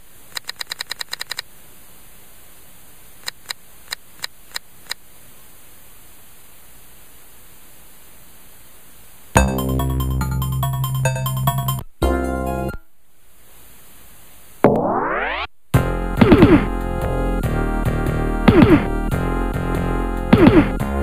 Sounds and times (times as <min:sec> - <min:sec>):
Music: 0:09.4 - 0:12.8, 0:15.8 - 0:21.0.